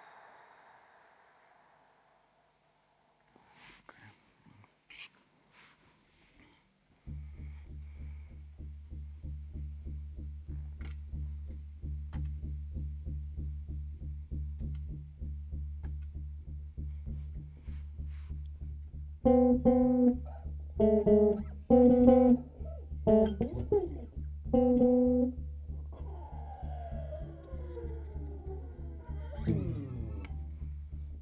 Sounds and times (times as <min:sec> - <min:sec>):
Bass guitar: 0:07.0 - 0:31.2
Electronic tuner: 0:07.0 - 0:31.2.